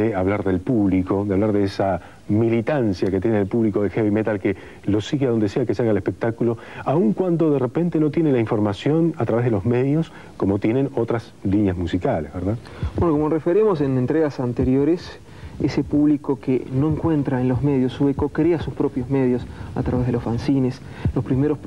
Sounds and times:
Speech: 0:00.0 - 0:21.6.

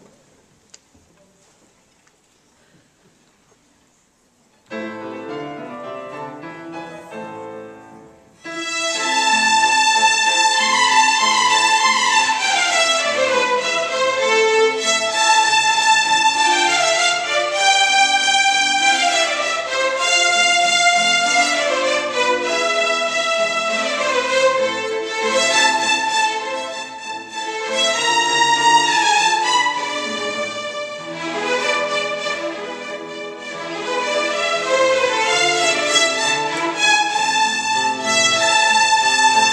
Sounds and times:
Orchestra: 0:00.0 - 0:39.5.

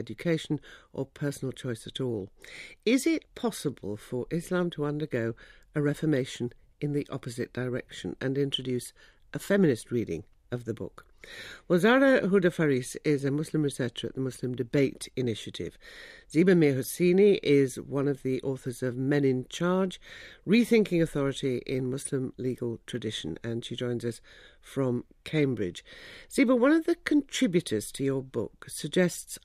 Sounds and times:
Speech: 0:00.0 - 0:11.1, 0:11.7 - 0:29.4.

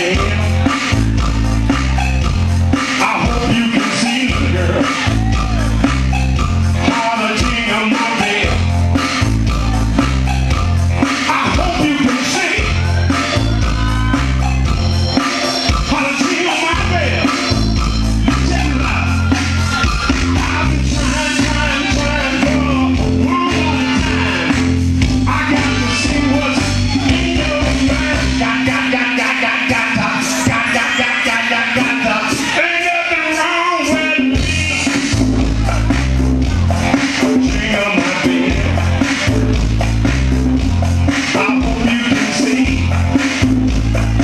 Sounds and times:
Music: 0:00.0 - 0:44.2.

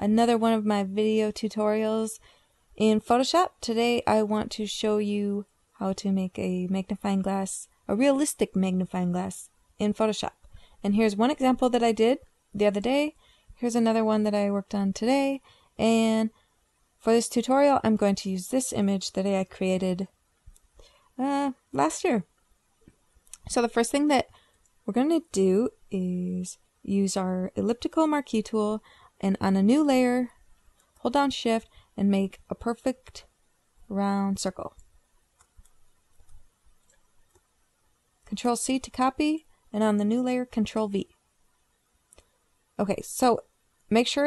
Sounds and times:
Speech: 0:00.0 - 0:02.2, 0:02.8 - 0:16.3, 0:17.1 - 0:20.1, 0:21.2 - 0:22.3, 0:23.4 - 0:24.3, 0:24.9 - 0:30.3, 0:31.0 - 0:33.2, 0:33.9 - 0:34.7, 0:38.3 - 0:41.1, 0:42.8 - 0:44.2.

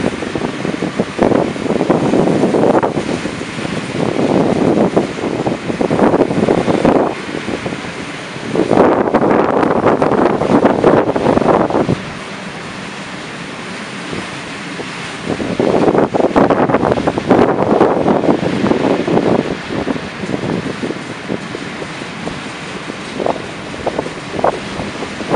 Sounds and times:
Vehicle: 0:00.0 - 0:25.3.

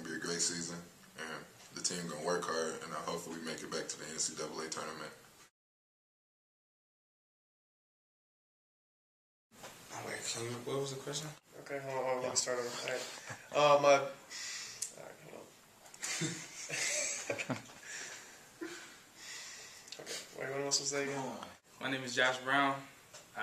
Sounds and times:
Male speech, man speaking: 0:00.0 - 0:05.2, 0:09.9 - 0:14.2, 0:14.9 - 0:15.6, 0:20.0 - 0:23.4.

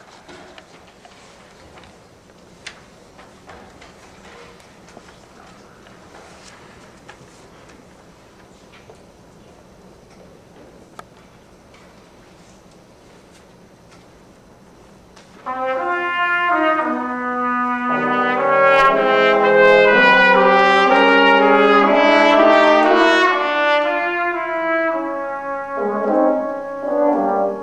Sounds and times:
Trombone: 0:15.4 - 0:27.6.

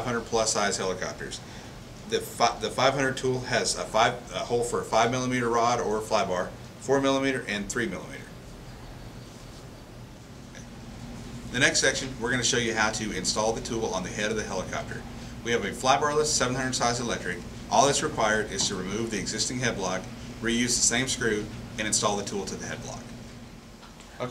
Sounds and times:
Speech: 0:00.0 - 0:01.4, 0:02.1 - 0:08.3, 0:11.5 - 0:23.1.

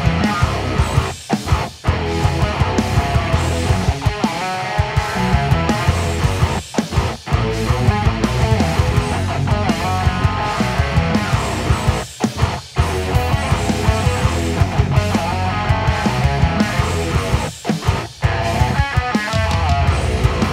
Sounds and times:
Bass guitar: 0:00.0 - 0:20.5
Electric guitar: 0:00.0 - 0:20.5.

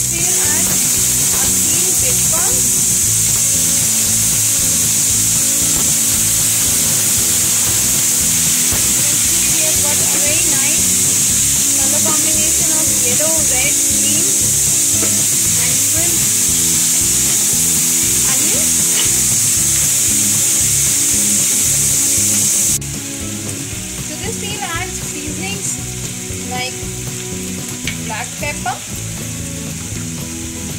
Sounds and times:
Frying (food): 0:00.0 - 0:30.7
Sizzle: 0:00.0 - 0:30.7.

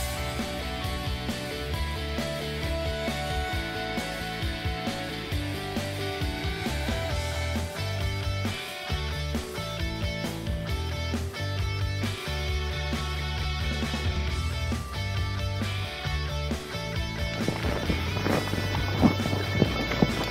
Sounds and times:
Music: 0:00.0 - 0:20.3.

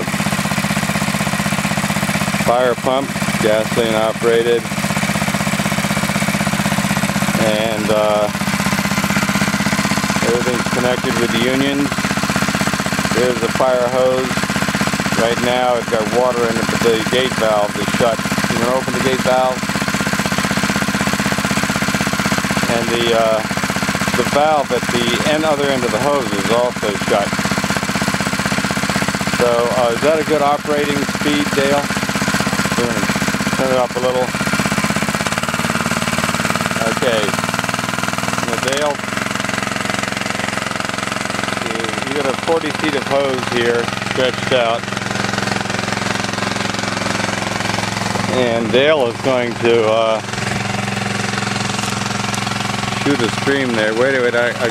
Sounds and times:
Pump (liquid): 0:00.0 - 0:54.7.

